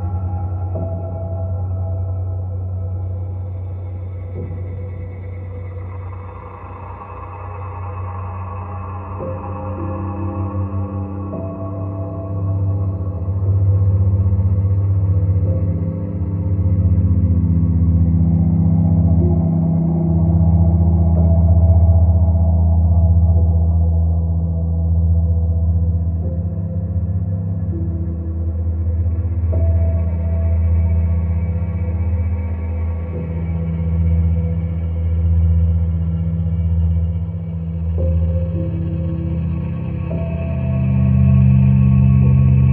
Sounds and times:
Ambient music: 0.0 - 42.7.

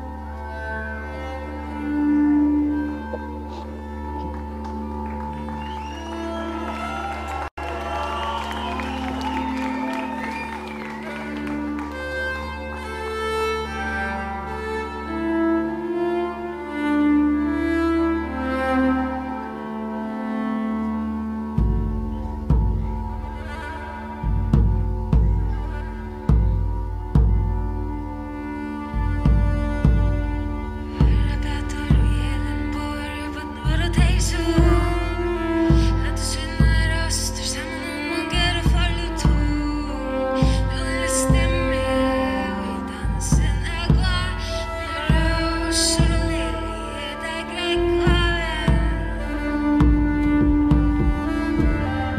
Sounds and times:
Cello: 0.0 - 52.1
Classical music: 0.0 - 52.1.

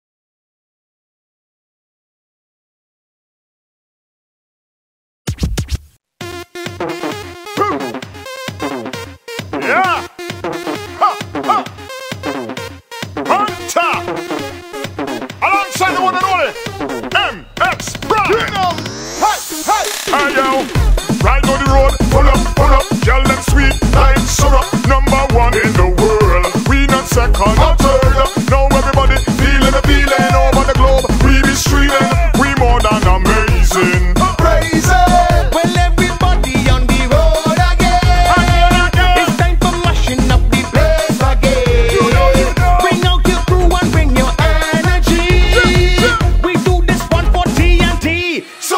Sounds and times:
Drum machine: 5.3 - 48.2
Music of Latin America: 6.2 - 48.7.

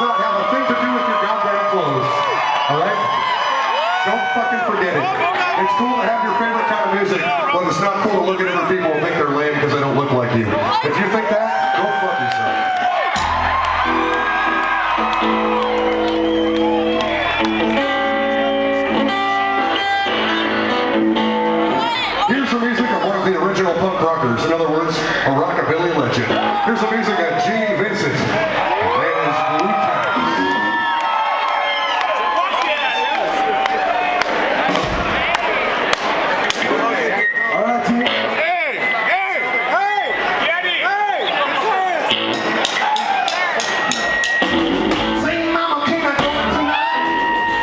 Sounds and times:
Speech: 0.0 - 3.1, 4.0 - 12.5, 22.1 - 30.5, 45.2 - 46.8.

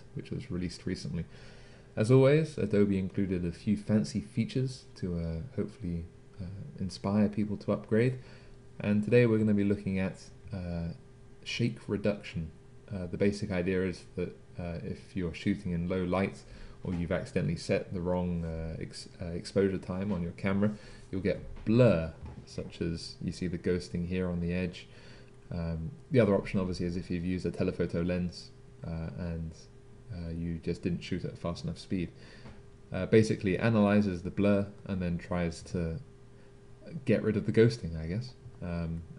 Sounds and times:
Speech: 0.0 - 1.3, 2.0 - 8.2, 8.8 - 24.9, 25.5 - 32.2, 32.9 - 36.1, 36.8 - 39.1.

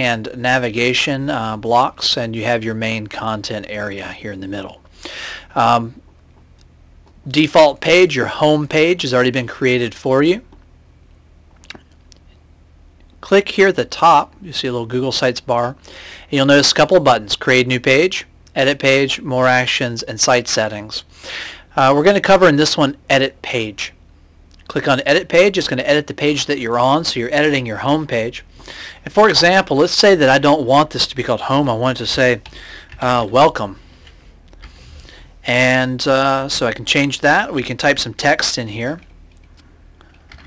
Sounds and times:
Speech: 0.0 - 4.8, 5.6 - 6.0, 7.3 - 10.6, 13.2 - 21.1, 21.8 - 24.0, 24.7 - 28.5, 29.1 - 33.8, 35.4 - 39.1.

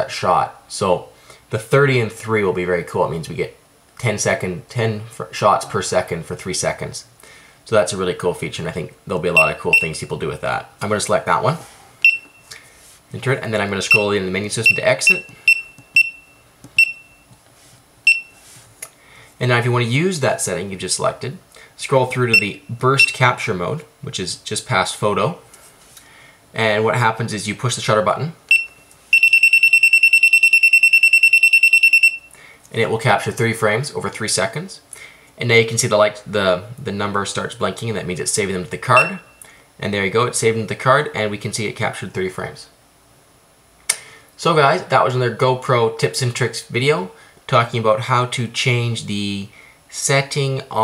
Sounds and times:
Speech: 0.0 - 7.1, 7.7 - 11.7, 13.1 - 15.3, 19.4 - 25.4, 26.6 - 28.4, 32.7 - 39.2, 39.8 - 42.8, 44.4 - 50.8
Buzzer: 14.7 - 17.3, 28.5 - 32.3.

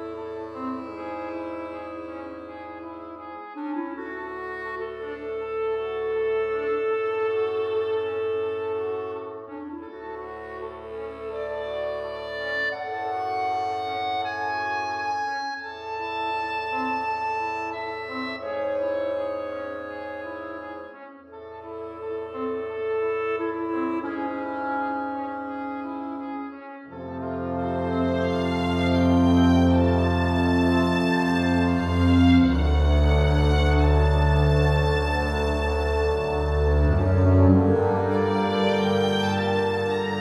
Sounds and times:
Music: 0.0 - 40.2.

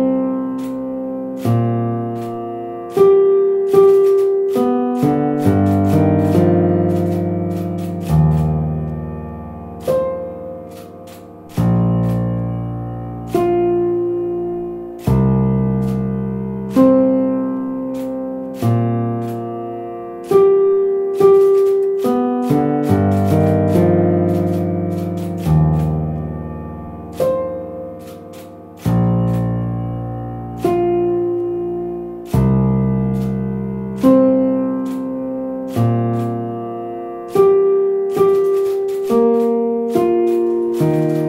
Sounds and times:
Electric piano: 0.0 - 41.2.

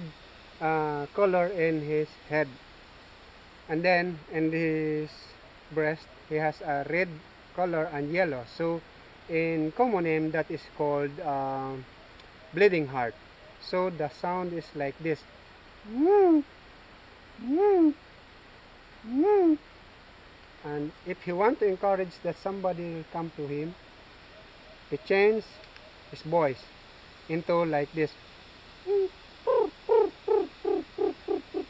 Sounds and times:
Speech: 0.0 - 2.6, 3.7 - 11.8, 12.6 - 15.2, 15.9 - 16.4, 17.4 - 18.0, 19.1 - 19.6, 20.6 - 23.8, 24.9 - 26.7, 27.3 - 28.2.

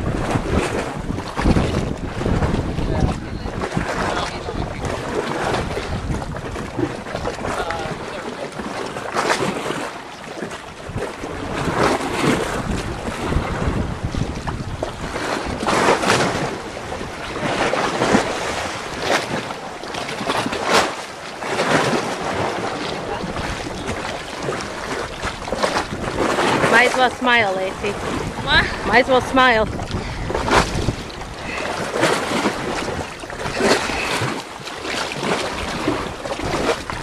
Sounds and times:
Speech: 2.8 - 5.0, 7.5 - 8.5, 26.7 - 29.7.

